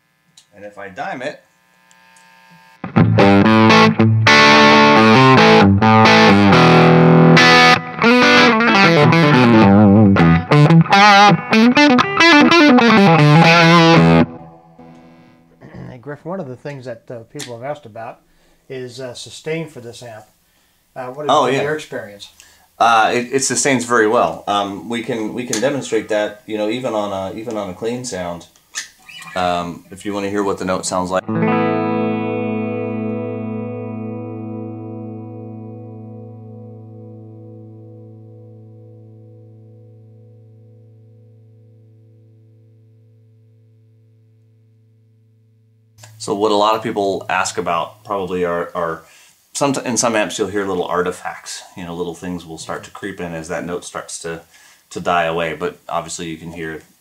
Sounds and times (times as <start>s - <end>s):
Distortion: 0.0s - 57.0s
Inside, small room: 0.0s - 57.0s
Guitar: 0.3s - 18.1s, 23.0s - 54.2s
Speech: 0.5s - 1.4s, 15.6s - 20.3s, 21.0s - 28.5s, 29.3s - 31.3s, 46.1s - 56.9s
Effects unit: 1.6s - 15.7s, 31.2s - 46.2s.